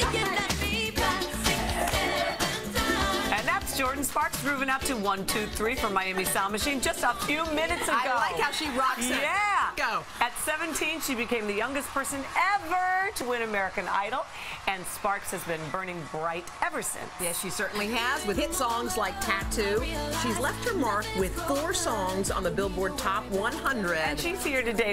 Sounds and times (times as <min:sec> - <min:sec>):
Music: 0:00.0 - 0:09.2, 0:17.4 - 0:24.9.